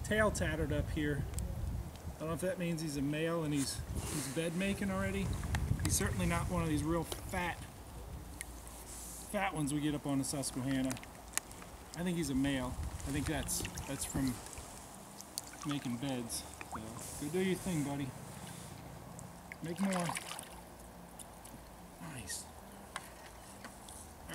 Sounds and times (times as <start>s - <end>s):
Wind: 0.0s - 24.3s.